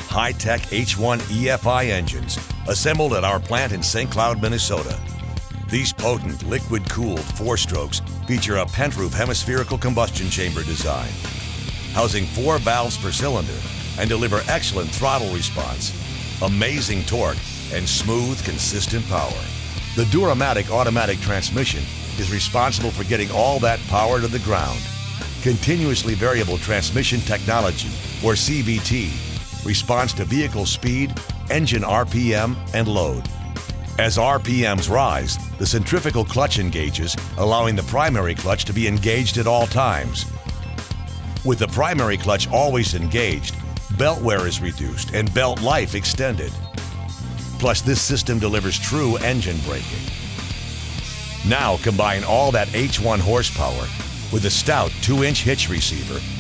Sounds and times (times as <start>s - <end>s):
Speech: 0.0s - 5.0s, 5.7s - 11.2s, 11.9s - 33.3s, 33.9s - 40.3s, 41.4s - 46.6s, 47.6s - 50.2s, 51.4s - 56.4s
Music: 0.0s - 56.4s.